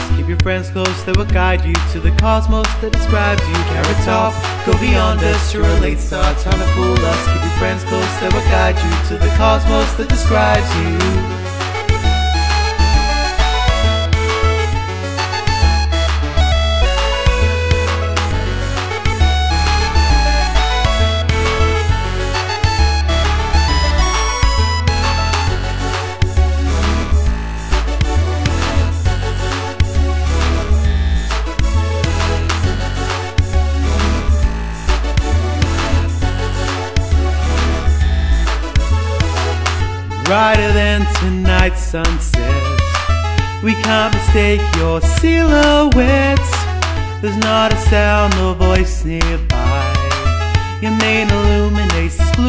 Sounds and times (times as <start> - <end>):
Music: 0.0 - 52.4.